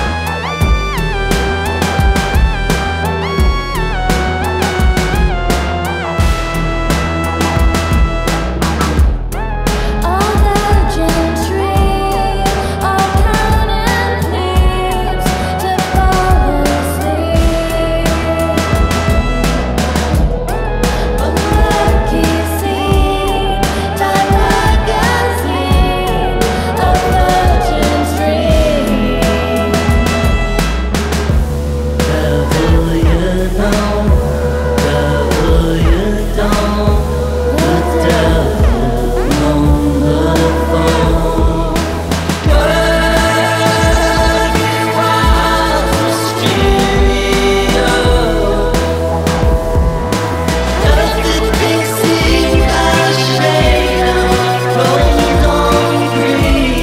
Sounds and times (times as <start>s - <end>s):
Music: 0.0s - 56.8s.